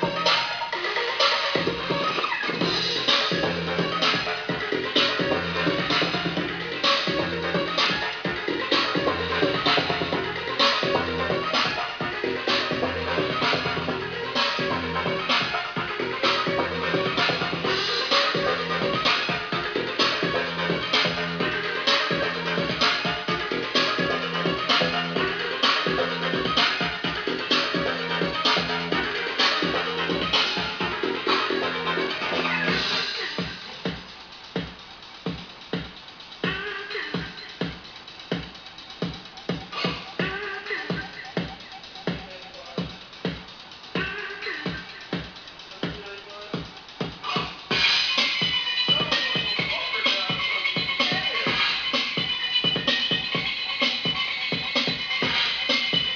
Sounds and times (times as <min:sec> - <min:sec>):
Inside, small room: 0:00.0 - 0:56.1
Music: 0:00.0 - 0:56.1
Speech: 0:45.7 - 0:46.7, 0:48.9 - 0:51.6.